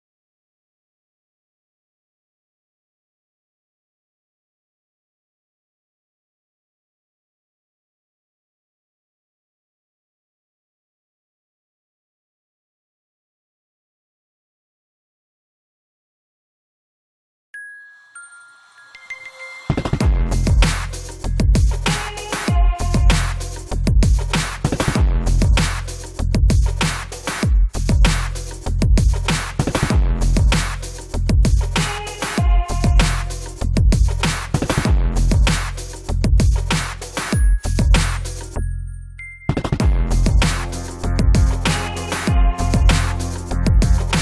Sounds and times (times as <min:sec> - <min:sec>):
Music: 0:17.6 - 0:44.2.